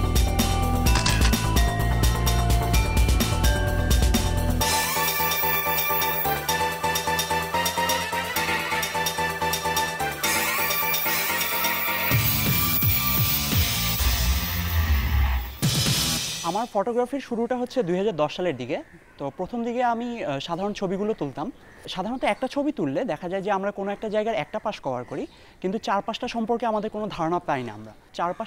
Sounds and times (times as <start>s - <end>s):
Music: 0.0s - 16.6s.